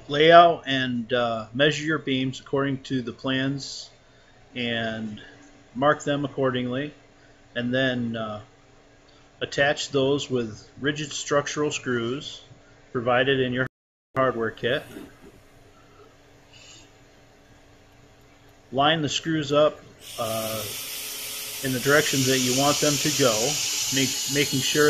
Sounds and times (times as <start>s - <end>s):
Speech: 0.0s - 3.9s, 4.6s - 7.0s, 7.6s - 8.5s, 9.4s - 15.1s, 18.7s - 20.7s, 21.6s - 24.8s.